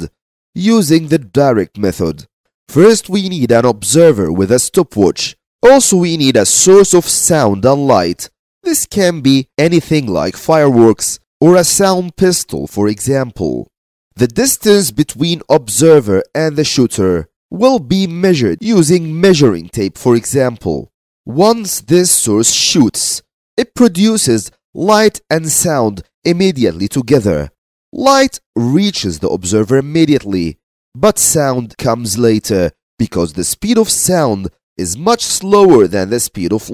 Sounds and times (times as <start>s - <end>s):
Speech: 0.0s - 36.7s.